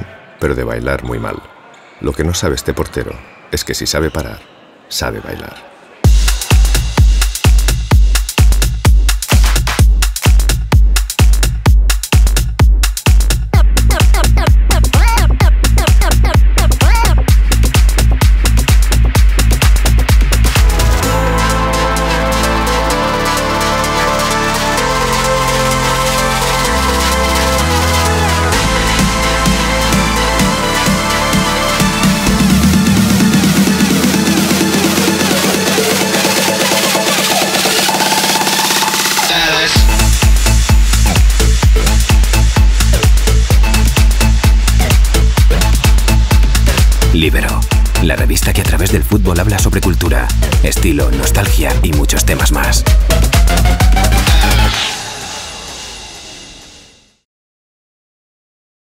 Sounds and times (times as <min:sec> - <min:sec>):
Techno: 0:06.1 - 0:56.9.